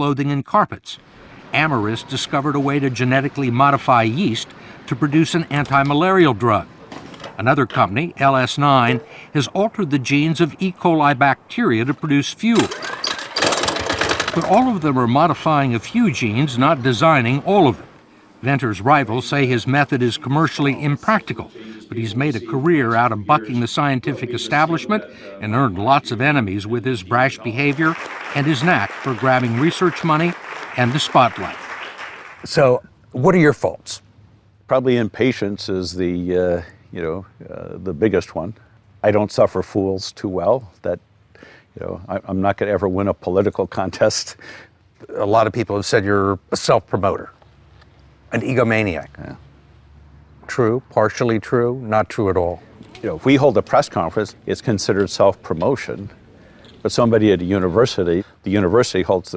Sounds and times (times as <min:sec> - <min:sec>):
Speech: 0:00.0 - 0:06.7, 0:07.4 - 0:12.8, 0:14.3 - 0:31.6, 0:32.5 - 0:34.0, 0:34.7 - 0:41.0, 0:41.8 - 0:44.4, 0:45.0 - 0:47.4, 0:48.3 - 0:49.4, 0:50.4 - 0:56.2, 0:56.8 - 0:59.3.